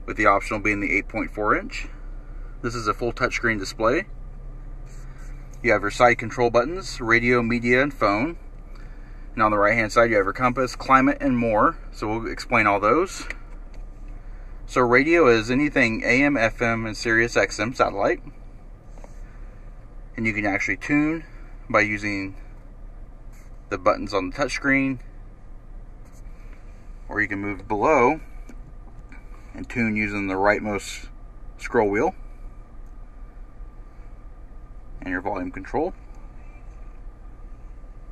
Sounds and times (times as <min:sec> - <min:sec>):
Speech: 0:00.0 - 0:02.0, 0:02.6 - 0:04.1, 0:05.6 - 0:08.4, 0:09.4 - 0:13.4, 0:14.7 - 0:18.3, 0:20.2 - 0:22.4, 0:23.7 - 0:25.1, 0:27.1 - 0:28.3, 0:29.5 - 0:32.2, 0:35.0 - 0:36.0.